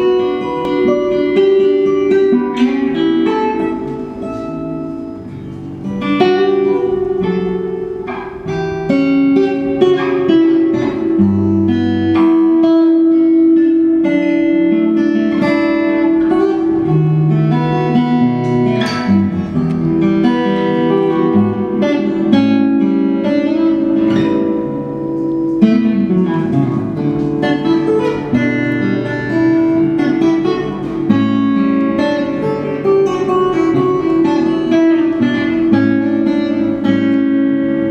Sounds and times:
Electric guitar: 0:00.0 - 0:37.9.

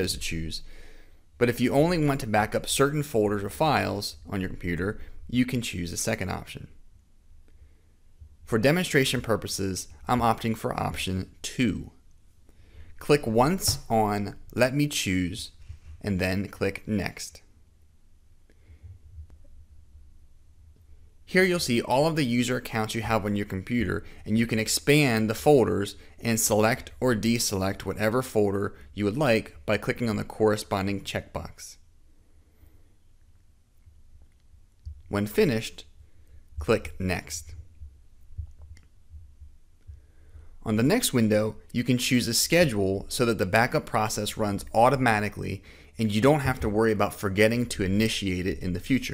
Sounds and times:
Speech: 0:00.0 - 0:00.7, 0:01.4 - 0:06.8, 0:08.5 - 0:12.0, 0:13.0 - 0:17.5, 0:21.3 - 0:31.8, 0:35.1 - 0:35.9, 0:36.6 - 0:37.6, 0:40.6 - 0:49.1
Inside, small room: 0:00.0 - 0:49.1.

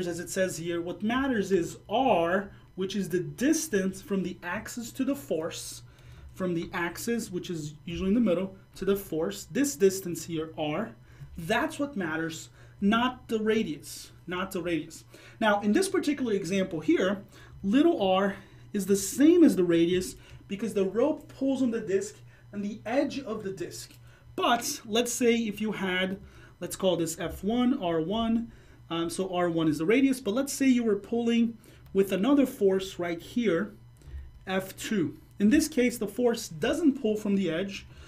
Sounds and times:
Speech: 0:00.0 - 0:33.8, 0:34.4 - 0:37.9.

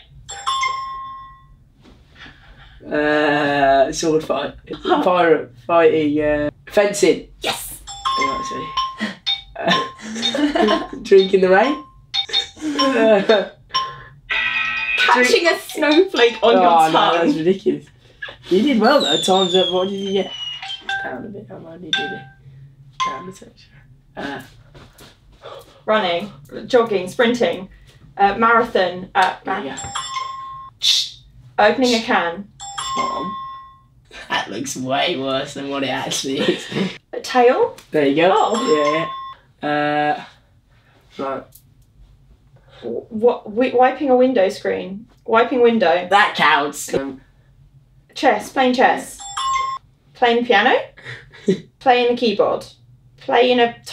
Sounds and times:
Inside, small room: 0:00.0 - 0:53.9
Speech: 0:15.1 - 0:17.9, 0:18.5 - 0:20.4, 0:30.8 - 0:32.4.

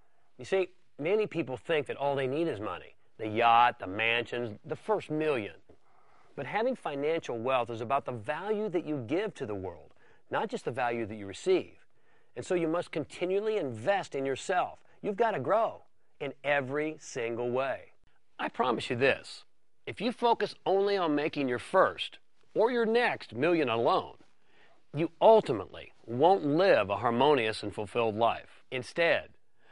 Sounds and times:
Speech: 0:00.4 - 0:05.7, 0:06.4 - 0:24.2, 0:24.9 - 0:29.4.

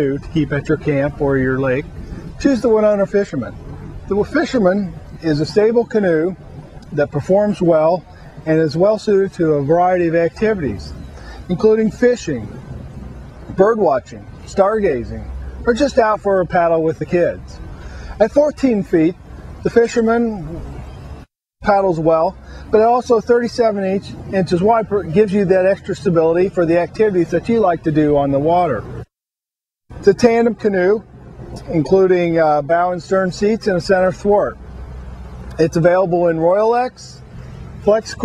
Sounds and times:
Speech: 0:00.0 - 0:12.6, 0:13.5 - 0:17.6, 0:18.2 - 0:20.7, 0:21.6 - 0:29.0, 0:30.0 - 0:34.6, 0:35.6 - 0:37.2, 0:37.8 - 0:38.2.

